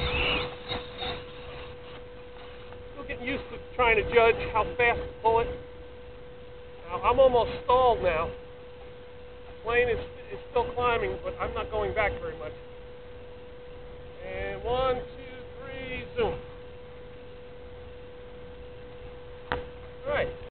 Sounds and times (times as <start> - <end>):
Narration, monologue: 1.8 - 18.3.